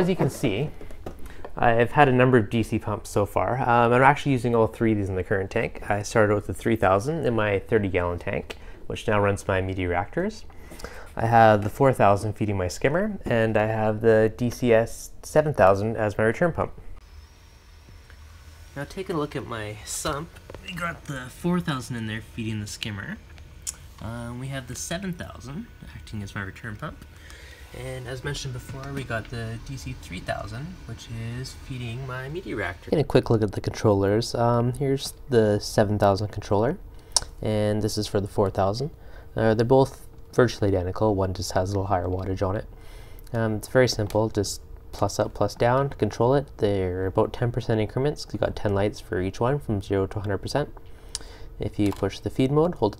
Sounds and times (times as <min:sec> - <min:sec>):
Speech: 0:00.0 - 0:00.8, 0:01.6 - 0:10.5, 0:11.2 - 0:16.8, 0:18.8 - 0:23.2, 0:24.0 - 0:27.0, 0:27.7 - 0:36.8, 0:37.4 - 0:42.7, 0:43.3 - 0:50.7, 0:51.6 - 0:52.9.